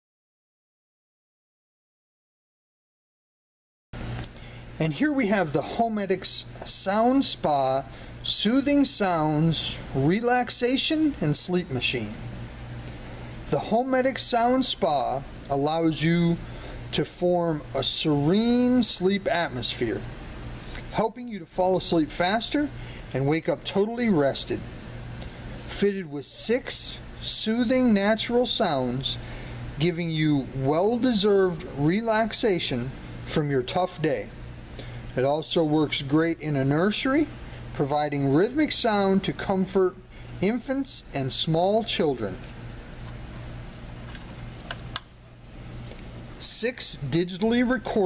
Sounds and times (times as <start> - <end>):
Speech: 4.8 - 12.2, 13.5 - 20.1, 20.9 - 24.7, 25.7 - 29.2, 29.8 - 34.4, 35.2 - 42.5, 46.4 - 48.0.